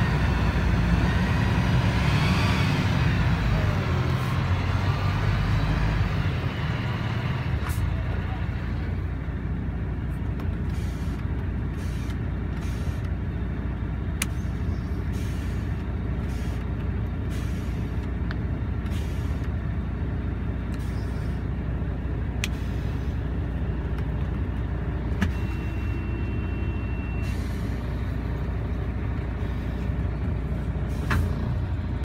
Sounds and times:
Vehicle: 0:00.0 - 0:32.0.

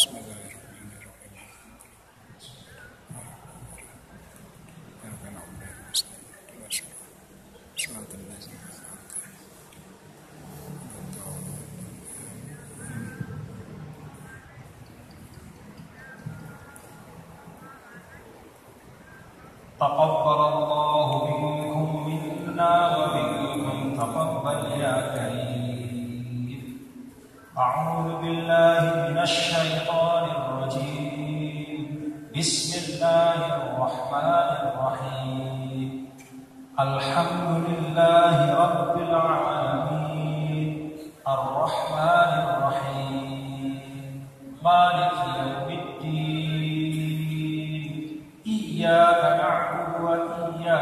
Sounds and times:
Chant: 0:00.0 - 0:07.1, 0:10.6 - 0:50.8.

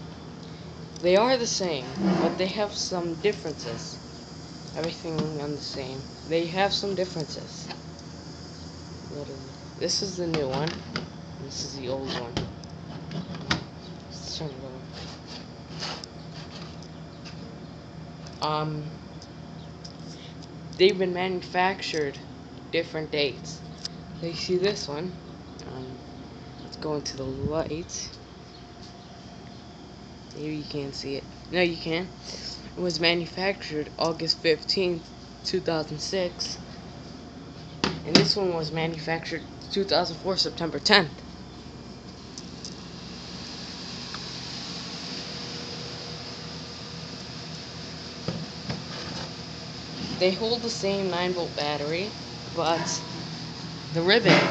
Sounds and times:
Speech: 0:01.0 - 0:04.0, 0:04.8 - 0:07.8, 0:09.1 - 0:10.8, 0:11.4 - 0:12.5, 0:14.1 - 0:14.9, 0:18.4 - 0:19.0, 0:20.8 - 0:22.2, 0:22.8 - 0:23.6, 0:24.2 - 0:26.0, 0:26.7 - 0:28.2, 0:30.3 - 0:36.6, 0:38.0 - 0:41.2, 0:50.2 - 0:53.1, 0:53.9 - 0:54.5.

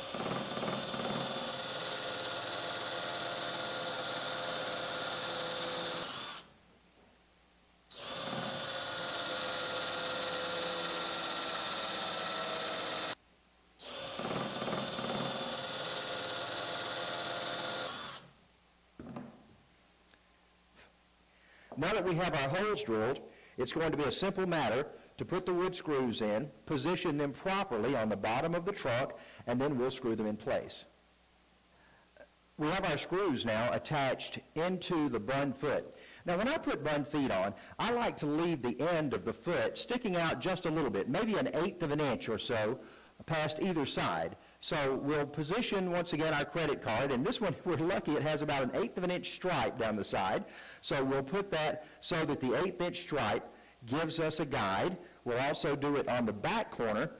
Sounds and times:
Wood: 0:14.0 - 0:18.2, 0:19.0 - 0:19.6.

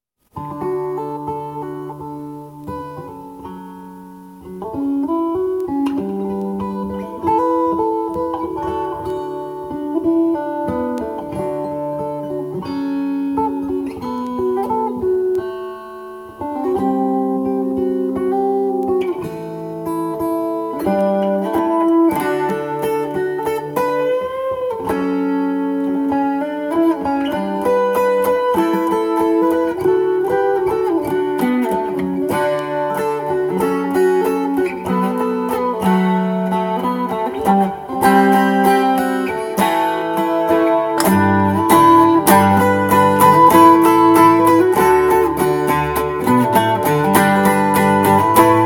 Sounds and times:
Guitar: 0:00.0 - 0:48.6.

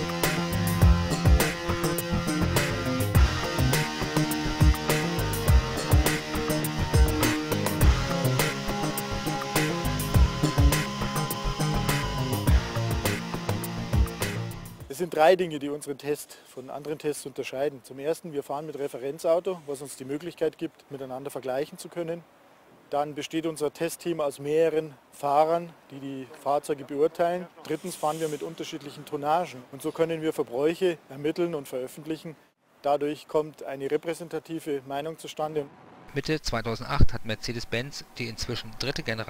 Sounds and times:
Speech: 0:14.9 - 0:22.2, 0:22.9 - 0:39.3.

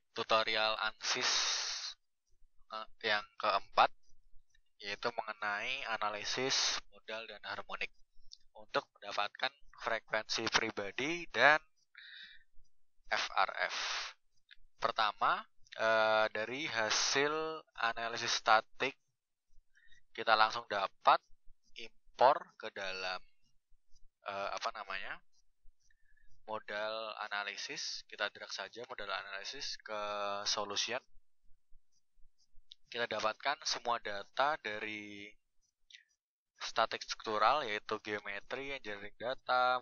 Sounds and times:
Speech: 0:00.2 - 0:02.0, 0:02.7 - 0:03.9, 0:04.8 - 0:07.9, 0:08.5 - 0:12.2, 0:13.1 - 0:14.1, 0:14.8 - 0:19.0, 0:20.2 - 0:21.2, 0:21.8 - 0:23.2, 0:24.2 - 0:25.2, 0:26.5 - 0:31.0, 0:32.9 - 0:35.4, 0:36.6 - 0:39.8.

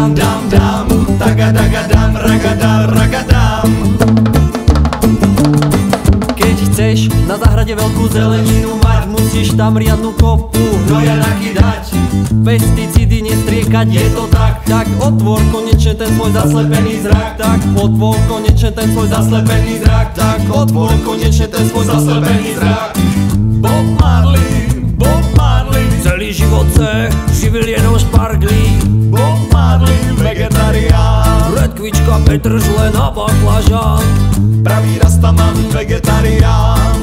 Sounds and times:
Music: 0:00.0 - 0:37.0.

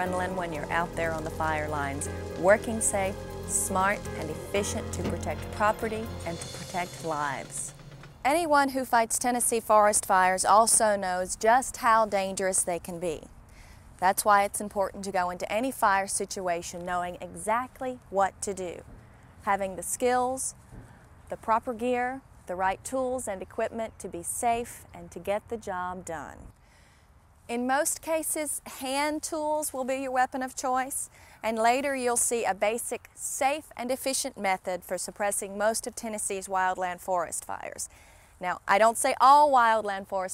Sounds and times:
Speech: 0:00.0 - 0:07.7, 0:08.3 - 0:13.3, 0:14.0 - 0:18.8, 0:19.4 - 0:20.5, 0:21.3 - 0:26.5, 0:27.5 - 0:40.3.

